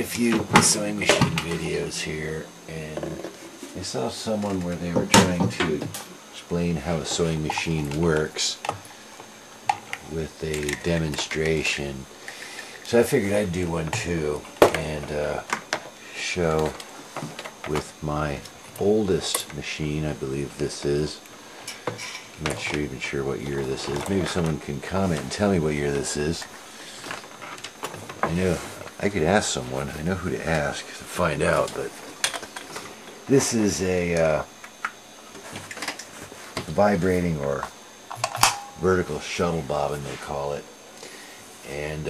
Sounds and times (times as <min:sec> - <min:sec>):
Speech: 0:00.0 - 0:08.7, 0:10.0 - 0:12.1, 0:12.8 - 0:16.8, 0:17.6 - 0:21.2, 0:22.4 - 0:26.5, 0:28.2 - 0:32.0, 0:33.3 - 0:34.5, 0:36.6 - 0:37.7, 0:38.8 - 0:40.7, 0:41.6 - 0:42.0.